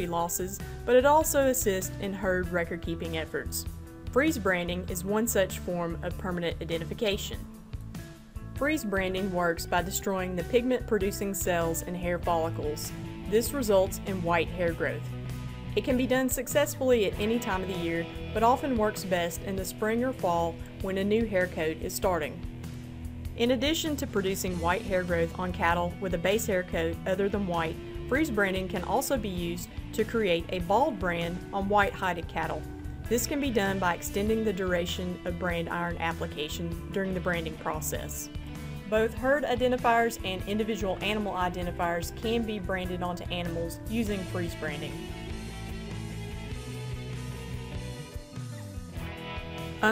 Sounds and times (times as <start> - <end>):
Speech: 0.0 - 3.6, 4.2 - 7.4, 8.6 - 15.1, 15.8 - 22.4, 23.4 - 38.3, 38.9 - 45.0
Music: 0.0 - 49.9.